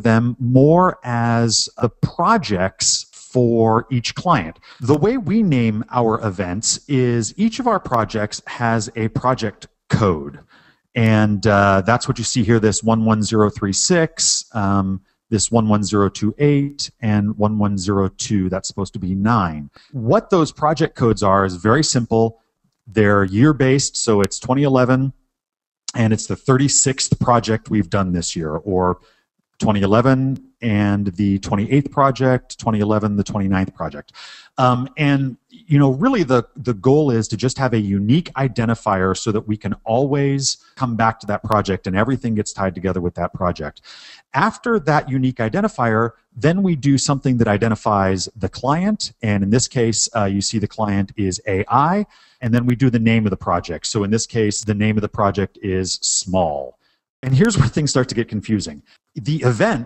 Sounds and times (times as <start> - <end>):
Speech: 0.0 - 25.2, 25.9 - 29.0, 29.6 - 59.8.